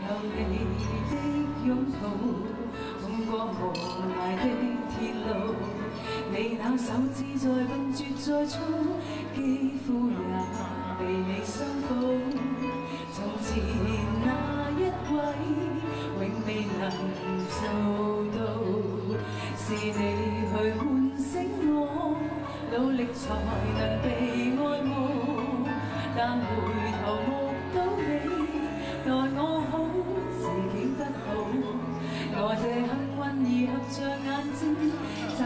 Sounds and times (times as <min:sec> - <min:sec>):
Female singing: 0:00.0 - 0:35.4
Music: 0:00.0 - 0:35.4.